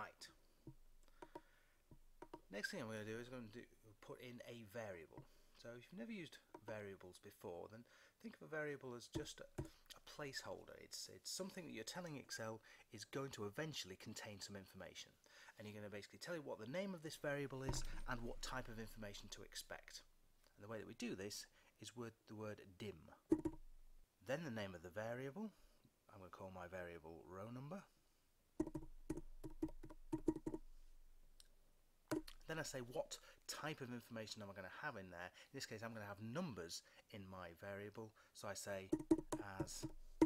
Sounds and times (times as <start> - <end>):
Speech: 0.0 - 0.4, 2.5 - 23.2, 24.2 - 27.9, 32.4 - 39.9.